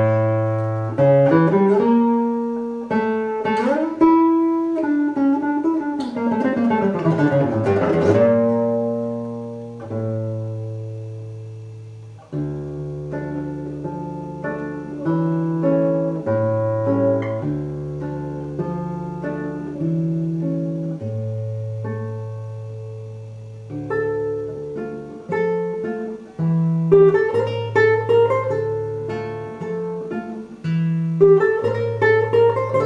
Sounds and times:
Acoustic guitar: 0.0s - 32.8s
Strum: 0.0s - 32.8s.

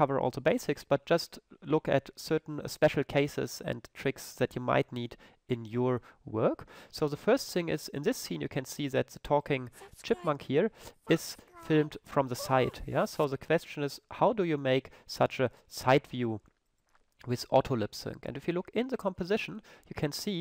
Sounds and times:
Speech: 0.0s - 16.4s, 17.2s - 20.4s.

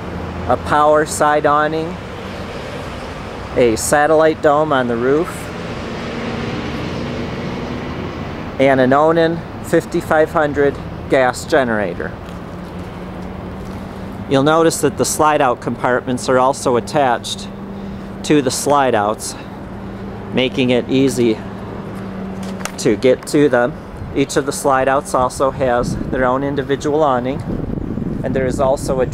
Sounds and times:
Speech: 0.5s - 2.0s, 3.6s - 5.5s, 8.6s - 12.2s, 14.3s - 17.5s, 18.2s - 19.5s, 20.4s - 21.4s, 22.8s - 27.4s, 28.2s - 29.1s.

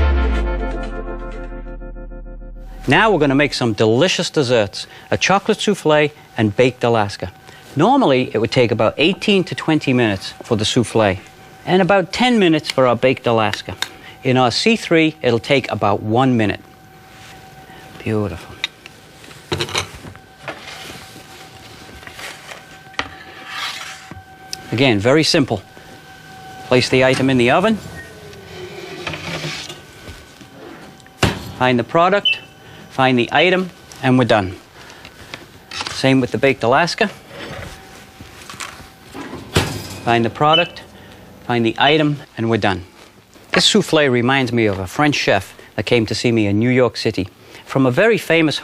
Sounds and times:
Microwave oven: 2.7s - 45.7s
Speech: 2.9s - 16.6s, 18.0s - 18.6s, 24.7s - 25.6s, 26.7s - 27.8s, 31.6s - 32.4s, 33.0s - 34.6s, 35.9s - 37.2s, 40.1s - 40.9s, 41.5s - 42.9s, 43.5s - 48.6s.

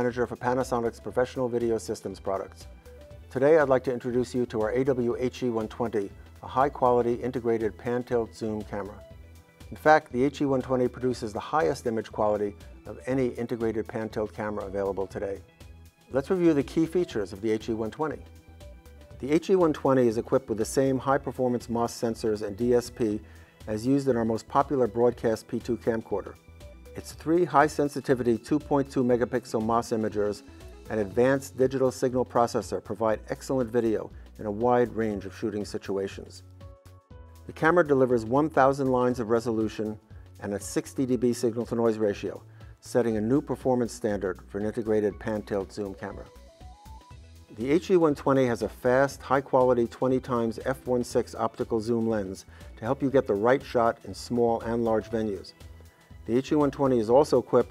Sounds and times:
Speech: 0.0s - 2.7s, 3.3s - 9.0s, 9.7s - 15.4s, 16.1s - 18.2s, 19.2s - 26.4s, 27.0s - 36.4s, 37.5s - 46.3s, 47.5s - 55.5s, 56.3s - 57.7s
Music: 0.0s - 57.7s.

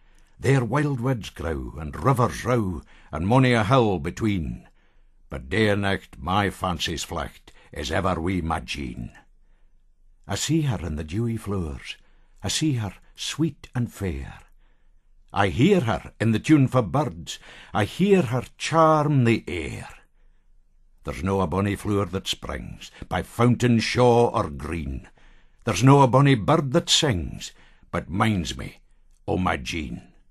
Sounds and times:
Speech: 0.4s - 4.7s, 5.3s - 9.3s, 10.3s - 14.5s, 15.3s - 20.0s, 21.0s - 30.2s.

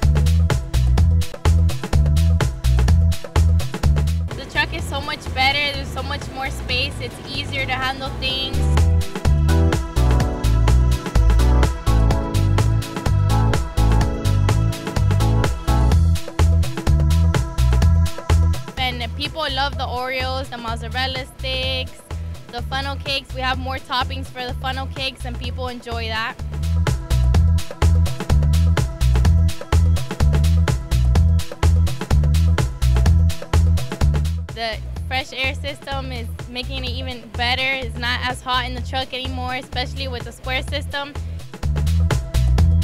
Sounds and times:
Music: 0.0s - 42.8s
Speech: 4.4s - 8.8s, 18.8s - 26.4s, 34.6s - 41.2s.

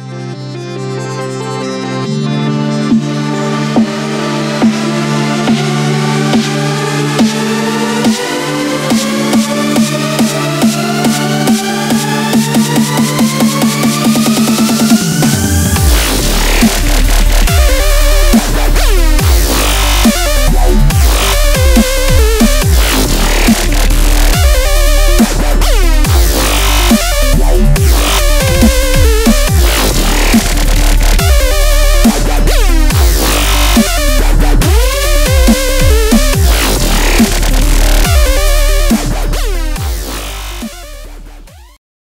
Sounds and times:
Music: 0.0s - 41.8s.

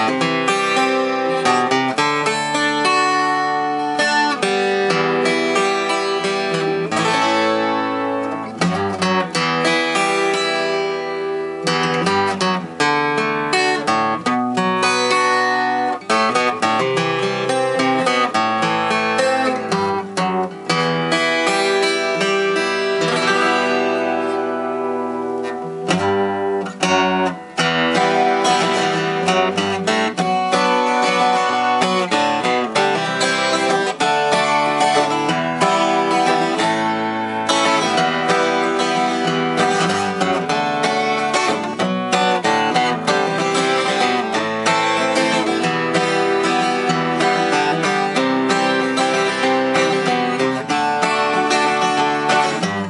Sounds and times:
Acoustic guitar: 0.0s - 52.9s.

